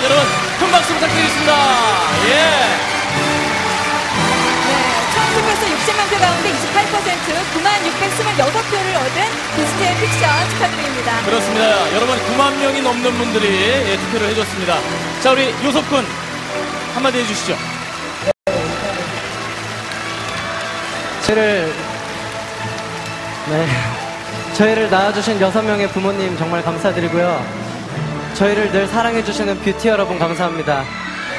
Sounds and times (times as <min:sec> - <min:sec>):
Music: 0:00.0 - 0:31.3.